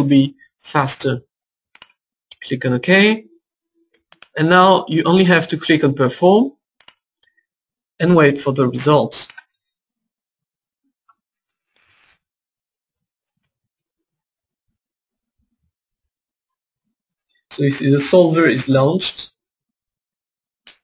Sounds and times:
Speech: 0.0s - 1.2s, 2.4s - 3.3s, 4.4s - 6.6s, 8.0s - 9.3s, 17.5s - 19.3s
Inside, small room: 12.9s - 20.0s.

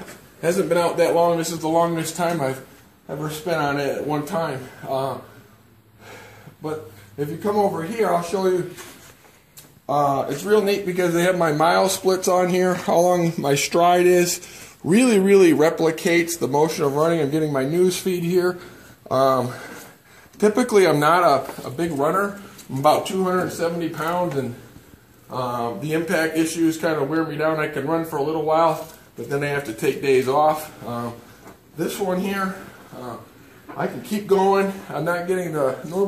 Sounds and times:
Speech: 0.0s - 5.4s, 6.6s - 8.9s, 9.9s - 19.8s, 20.4s - 24.7s, 25.3s - 31.2s, 31.8s - 36.0s
Inside, small room: 0.0s - 36.0s.

